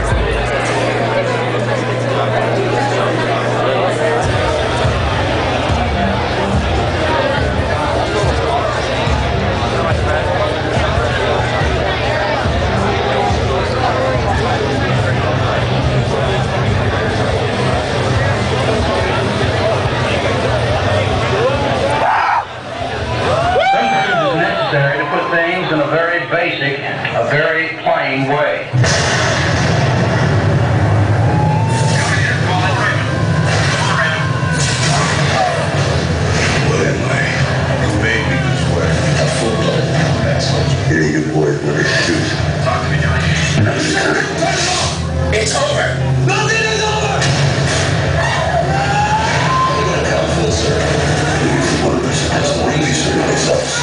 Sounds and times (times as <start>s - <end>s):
Speech: 0.0s - 22.4s, 23.8s - 28.8s, 31.8s - 47.3s, 49.5s - 53.8s.